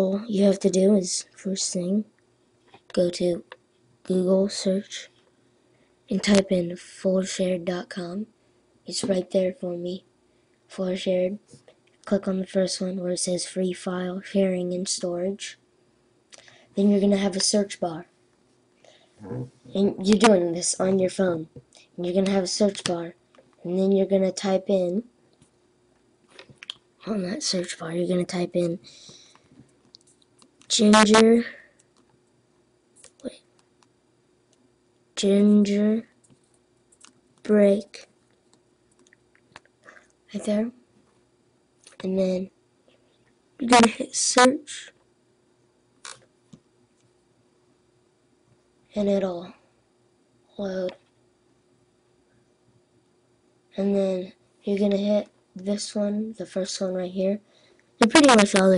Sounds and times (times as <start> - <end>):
Speech: 0.0 - 2.1, 2.9 - 3.5, 4.1 - 5.2, 6.1 - 8.3, 8.9 - 10.1, 10.7 - 15.6, 16.8 - 18.1, 19.2 - 25.1, 27.0 - 28.9, 30.7 - 31.7, 33.1 - 33.4, 35.2 - 36.1, 37.5 - 38.1, 40.3 - 40.8, 42.0 - 42.6, 43.6 - 45.0, 48.9 - 49.6, 50.6 - 51.0, 53.8 - 57.4, 58.0 - 58.7
Inside, small room: 0.0 - 58.7.